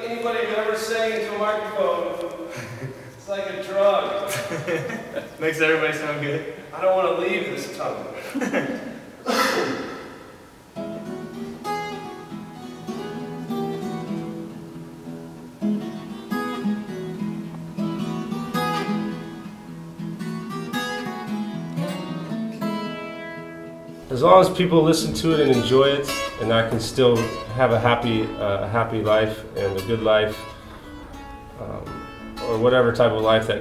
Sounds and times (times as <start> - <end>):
String section: 10.8 - 33.6.